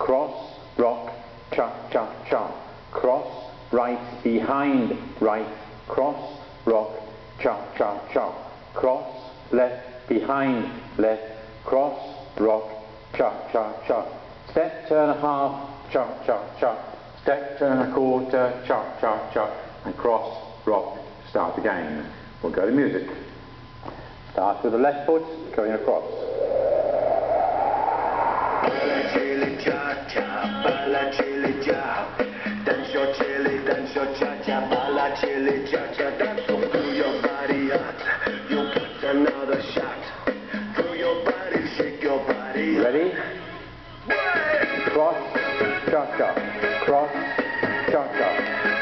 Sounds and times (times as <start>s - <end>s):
Speech: 0.0s - 23.3s, 24.4s - 26.2s, 42.1s - 43.7s, 44.9s - 47.2s, 47.9s - 48.5s.